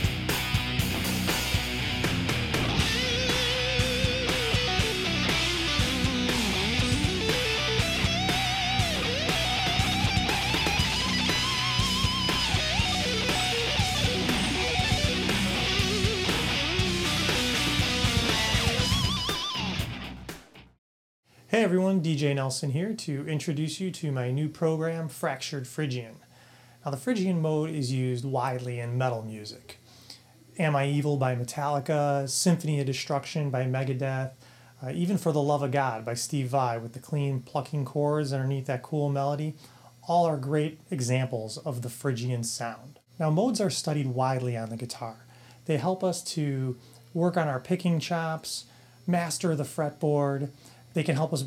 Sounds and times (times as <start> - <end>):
Electric guitar: 0.0 - 20.7
Speech: 21.5 - 26.2, 26.8 - 29.8, 30.6 - 51.4.